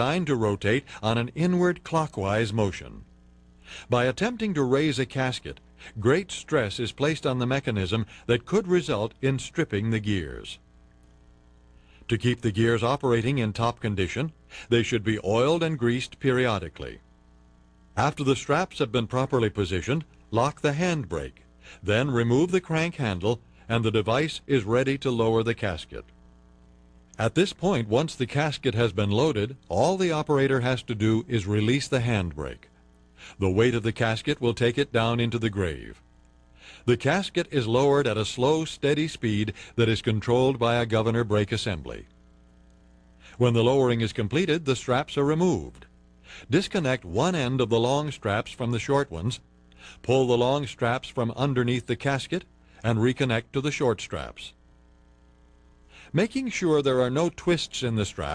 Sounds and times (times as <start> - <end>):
Speech: 0.0 - 3.1, 3.8 - 10.6, 12.1 - 17.0, 18.0 - 26.1, 27.2 - 32.7, 33.3 - 36.0, 36.9 - 42.1, 43.3 - 49.4, 50.0 - 54.6, 56.1 - 58.3.